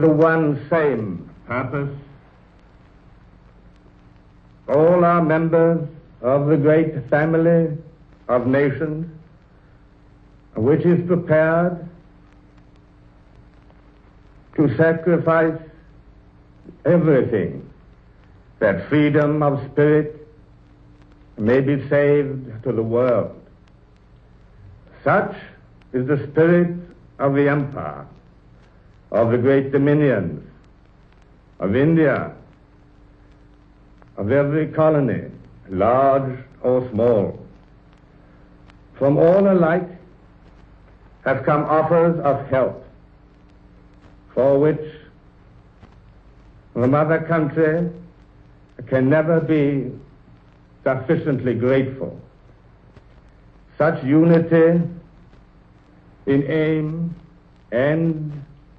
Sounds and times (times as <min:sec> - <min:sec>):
Male speech, man speaking: 0:00.0 - 0:02.1, 0:04.7 - 0:09.2, 0:10.6 - 0:12.0, 0:14.6 - 0:15.8, 0:16.7 - 0:17.8, 0:18.6 - 0:20.3, 0:21.4 - 0:23.5, 0:25.0 - 0:28.2, 0:29.2 - 0:30.6, 0:31.6 - 0:32.5, 0:34.2 - 0:37.6, 0:39.0 - 0:40.1, 0:41.2 - 0:43.0, 0:44.3 - 0:45.1, 0:46.8 - 0:48.1, 0:48.8 - 0:50.1, 0:50.8 - 0:52.3, 0:53.8 - 0:55.0, 0:56.2 - 0:58.5.